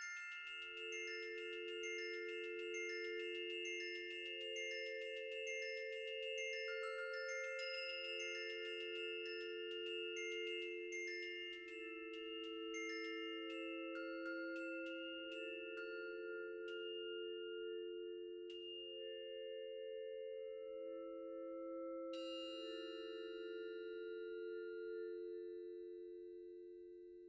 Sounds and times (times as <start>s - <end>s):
Marimba, xylophone: 0.0s - 23.3s
Glockenspiel: 0.0s - 27.2s.